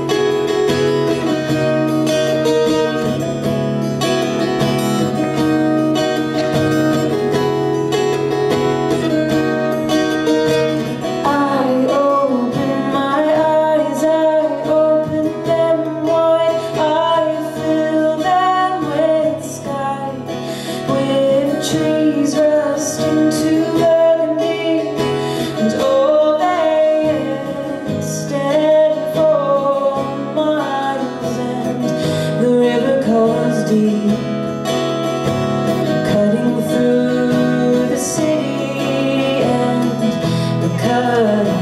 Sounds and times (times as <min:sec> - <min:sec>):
Music: 0:00.0 - 0:41.6
Female singing: 0:11.2 - 0:34.4, 0:35.9 - 0:41.6.